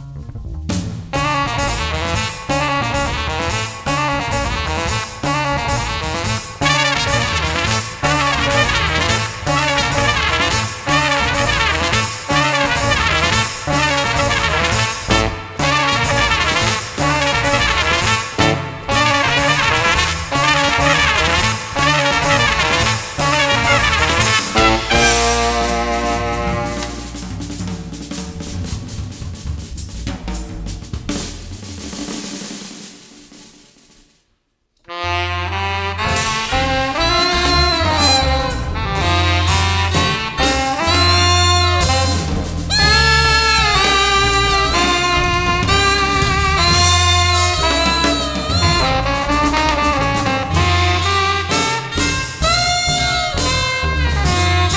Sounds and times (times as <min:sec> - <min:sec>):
Bass drum: 0:00.0 - 0:32.4, 0:35.3 - 0:54.7
Drum kit: 0:00.0 - 0:34.3, 0:34.9 - 0:54.7
Drum roll: 0:00.0 - 0:34.4, 0:35.1 - 0:54.7
Brass instrument: 0:00.7 - 0:33.5, 0:34.8 - 0:54.7
Rimshot: 0:00.8 - 0:34.1.